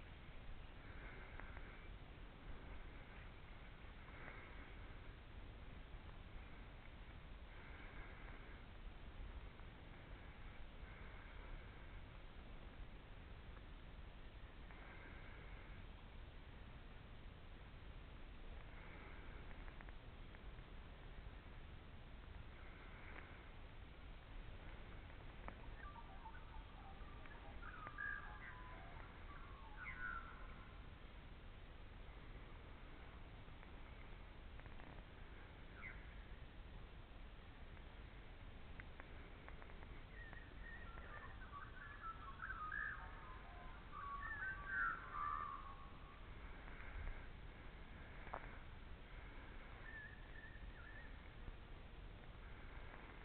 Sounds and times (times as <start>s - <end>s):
Chirp, tweet: 25.6s - 30.7s, 35.7s - 36.2s, 40.1s - 46.1s, 49.8s - 51.3s.